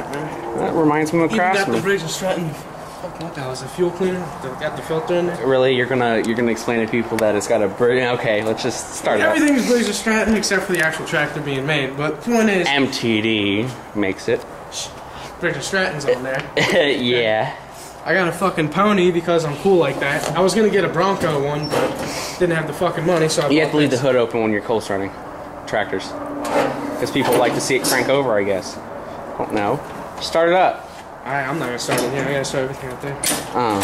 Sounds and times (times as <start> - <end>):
Speech: 27.0 - 28.8, 29.4 - 33.8.